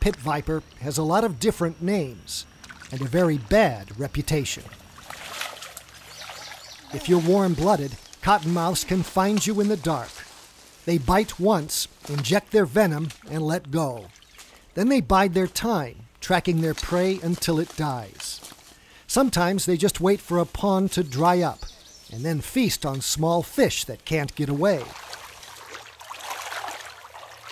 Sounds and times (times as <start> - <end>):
Speech: 0.0 - 4.7, 6.9 - 10.3, 10.9 - 14.1, 14.8 - 18.5, 19.1 - 25.0
Outside, rural or natural: 0.0 - 27.5.